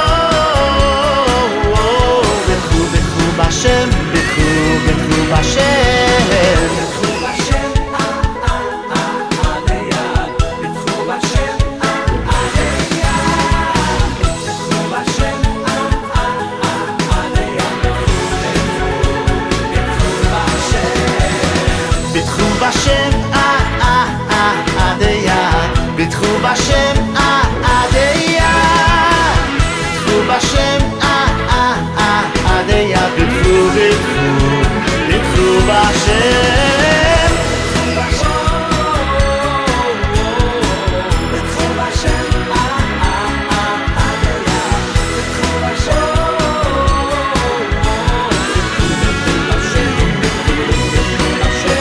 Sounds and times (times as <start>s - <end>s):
Pop music: 0.0s - 51.8s.